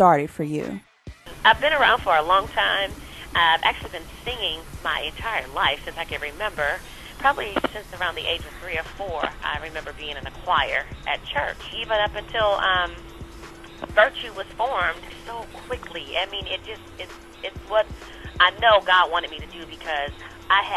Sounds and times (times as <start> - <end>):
Speech: 0.0 - 0.8, 1.5 - 13.0, 13.8 - 16.9, 17.5 - 20.7
Music: 0.1 - 20.7
Radio: 1.5 - 13.0, 13.8 - 20.7.